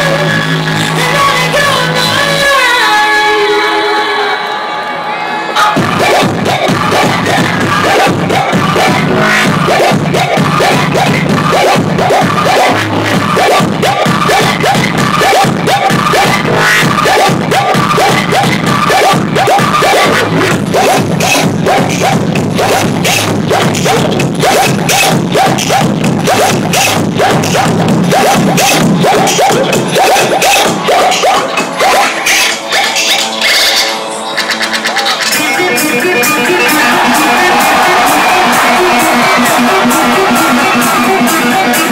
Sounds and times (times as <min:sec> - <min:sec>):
Beatboxing: 0:05.6 - 0:41.9.